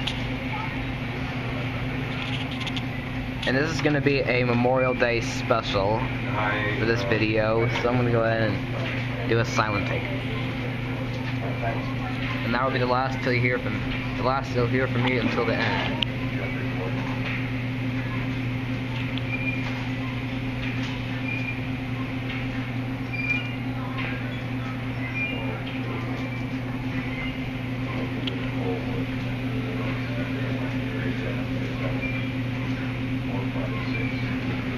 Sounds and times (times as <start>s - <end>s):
Speech: 3.5s - 17.2s.